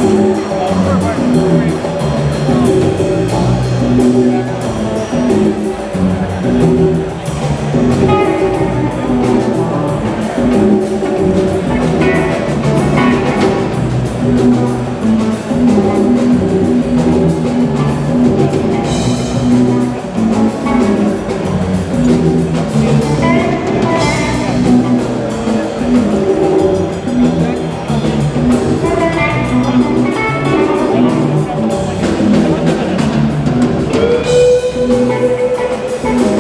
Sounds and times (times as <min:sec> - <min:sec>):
Music: 0:00.0 - 0:36.4.